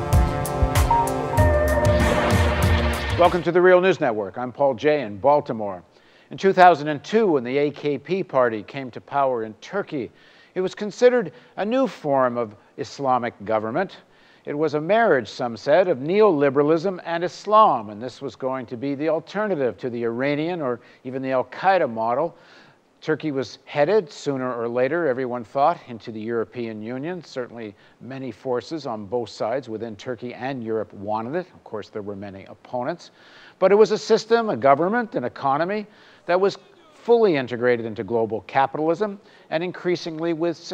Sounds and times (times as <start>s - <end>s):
Speech: 3.2s - 22.4s, 23.0s - 40.7s.